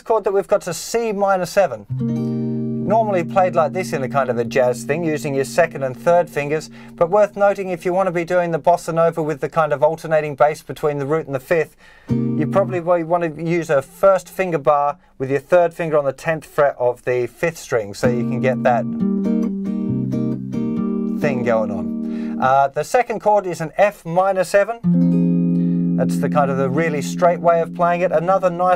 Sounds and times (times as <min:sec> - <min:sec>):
Guitar: 0:01.8 - 0:07.9, 0:12.0 - 0:14.4, 0:18.0 - 0:22.5, 0:24.8 - 0:28.7.